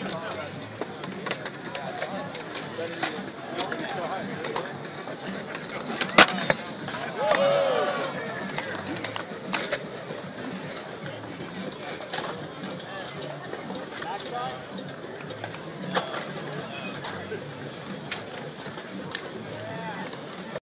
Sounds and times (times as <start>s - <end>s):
Speech: 0.0s - 20.6s.